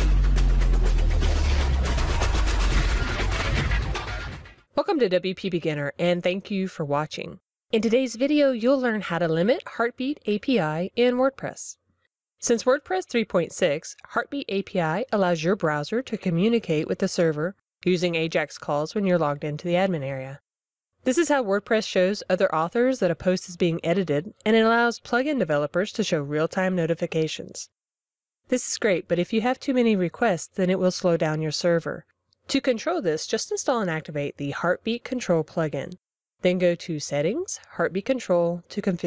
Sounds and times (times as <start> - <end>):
Speech: 4.8 - 11.8, 12.4 - 20.4, 21.1 - 27.7, 28.5 - 39.0.